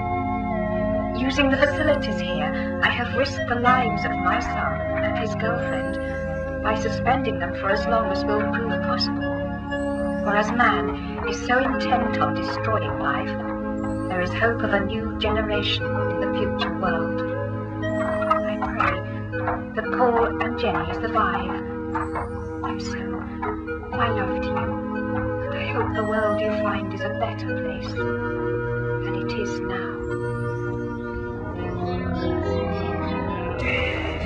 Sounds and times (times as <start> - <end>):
Music: 0.0 - 34.2
Speech: 1.2 - 5.9, 6.7 - 9.1, 10.3 - 13.4, 14.1 - 17.2, 18.4 - 19.0, 19.8 - 21.6, 22.7 - 23.2, 24.0 - 24.7, 25.6 - 28.0, 29.1 - 30.0, 33.6 - 34.2.